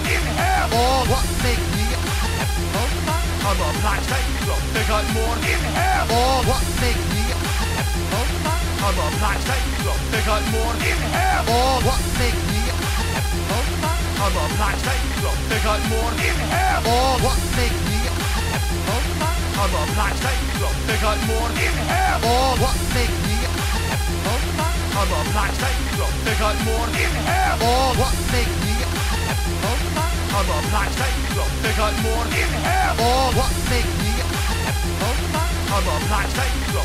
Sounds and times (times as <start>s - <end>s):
Speech: 0.0s - 2.1s, 2.7s - 7.5s, 8.1s - 12.9s, 13.5s - 18.2s, 18.8s - 23.6s, 24.2s - 29.0s, 29.6s - 36.8s
Music: 0.0s - 36.8s.